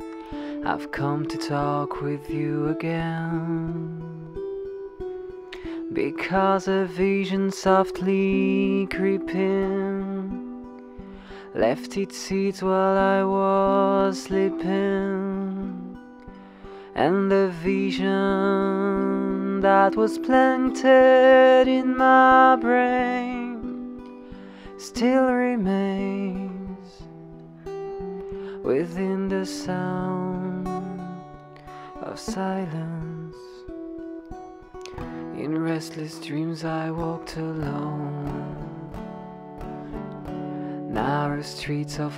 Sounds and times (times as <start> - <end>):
Music: 0.0 - 42.1.